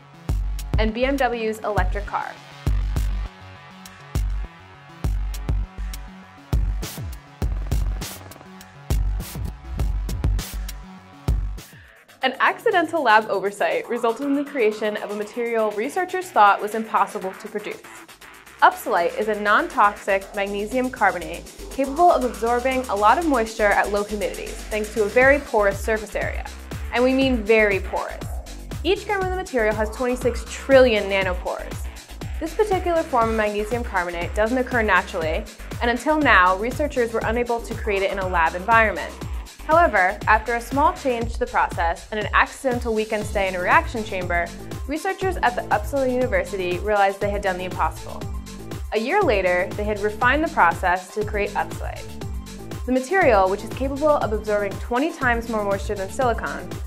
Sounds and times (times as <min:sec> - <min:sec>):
Music: 0:00.0 - 0:56.8
Speech: 0:00.8 - 0:02.4, 0:12.2 - 0:17.8, 0:18.6 - 0:28.3, 0:28.9 - 0:31.8, 0:32.4 - 0:48.2, 0:48.9 - 0:52.0, 0:52.9 - 0:56.7.